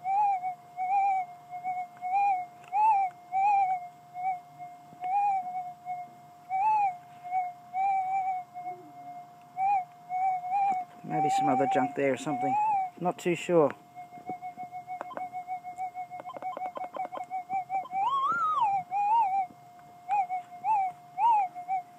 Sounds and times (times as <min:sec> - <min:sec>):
Speech: 0:11.1 - 0:13.8.